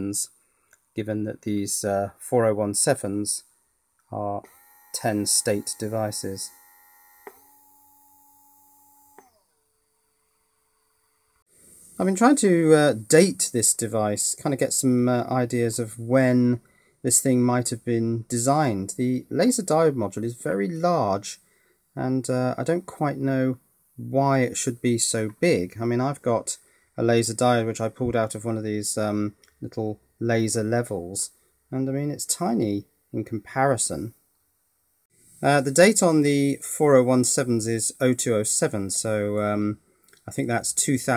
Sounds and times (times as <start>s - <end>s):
Speech: 0.0s - 0.3s, 1.0s - 3.5s, 4.1s - 6.5s, 12.0s - 21.4s, 22.0s - 34.2s, 35.4s - 41.1s
Inside, small room: 0.0s - 41.1s.